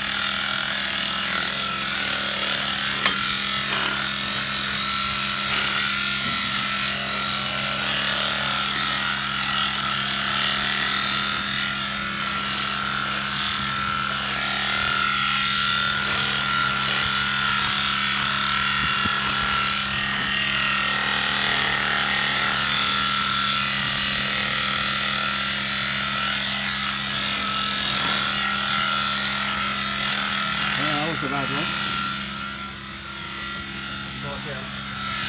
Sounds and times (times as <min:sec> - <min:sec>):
Speech: 0:30.8 - 0:31.8, 0:34.2 - 0:34.8.